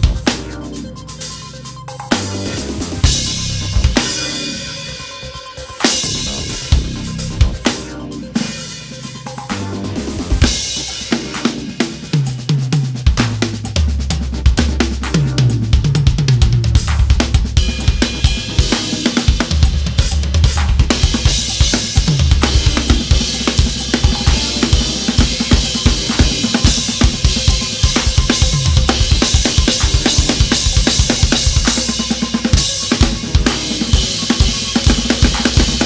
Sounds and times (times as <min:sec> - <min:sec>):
Drum: 0:00.0 - 0:35.8
Drum kit: 0:00.0 - 0:35.8.